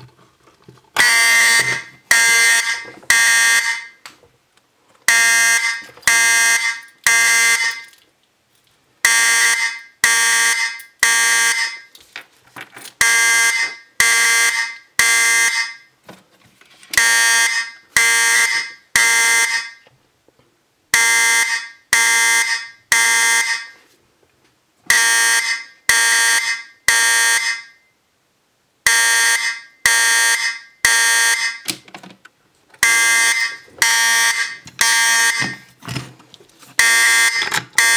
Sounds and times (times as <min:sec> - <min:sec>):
Fire alarm: 0:01.0 - 0:04.0, 0:05.1 - 0:07.9, 0:09.0 - 0:11.9, 0:13.0 - 0:15.9, 0:17.0 - 0:19.9, 0:21.0 - 0:23.8, 0:24.9 - 0:28.0, 0:28.9 - 0:31.7, 0:32.8 - 0:35.7, 0:36.8 - 0:37.9.